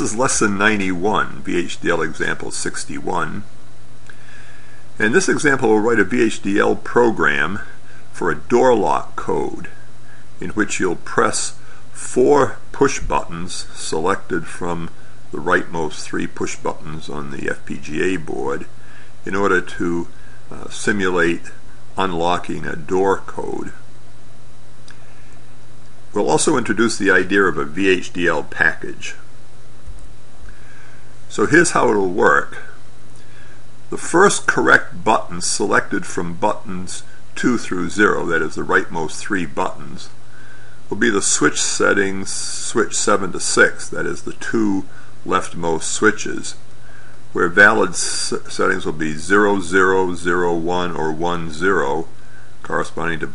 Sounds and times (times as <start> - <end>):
Speech: 0.0 - 3.5, 5.0 - 23.9, 26.1 - 29.3, 31.3 - 32.8, 33.9 - 40.2, 40.9 - 46.6, 47.3 - 53.3.